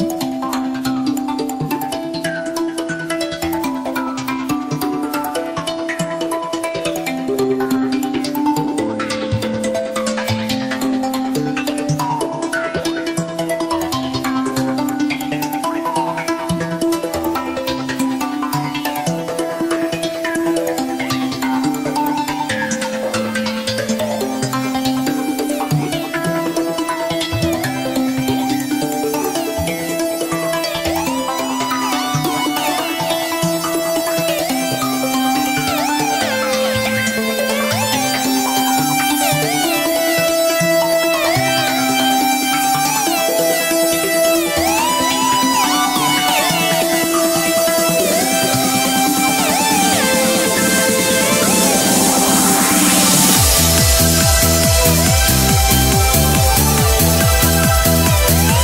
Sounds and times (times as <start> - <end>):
Techno: 0.0 - 58.6.